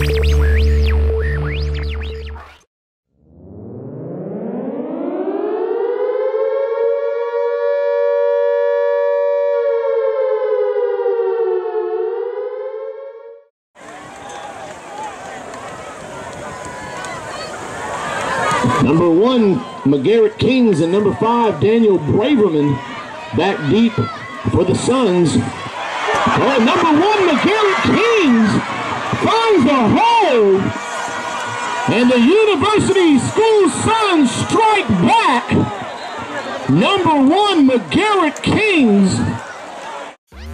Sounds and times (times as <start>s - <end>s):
Speech: 18.6s - 25.5s, 26.3s - 28.6s, 29.2s - 30.7s, 31.9s - 35.7s, 36.3s - 39.4s.